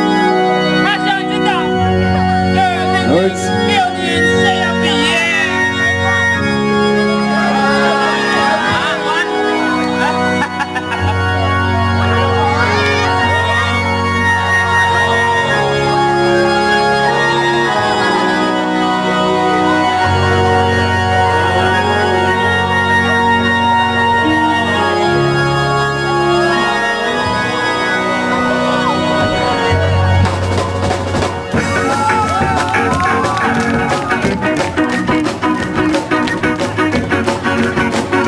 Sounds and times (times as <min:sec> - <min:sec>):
Music: 0:00.0 - 0:38.2.